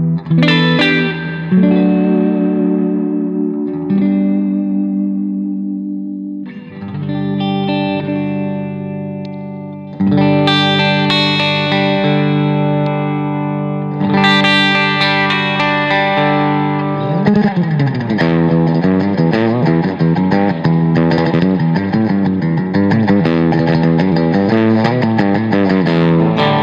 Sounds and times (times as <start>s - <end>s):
Distortion: 0.0s - 26.6s
Guitar: 0.0s - 26.6s.